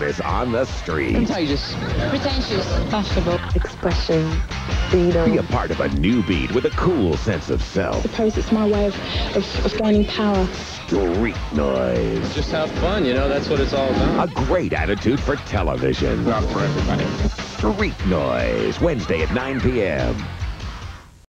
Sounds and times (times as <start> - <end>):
Music: 0.0 - 21.3
Speech: 5.0 - 20.2.